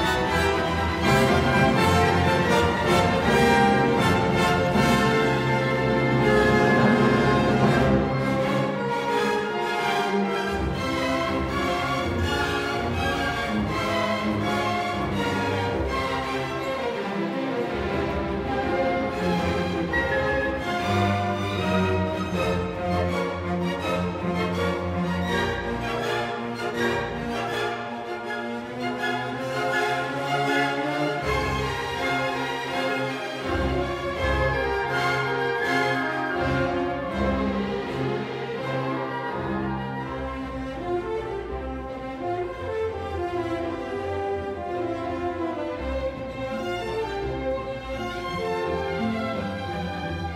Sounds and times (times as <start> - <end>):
Music: 0.0 - 50.3.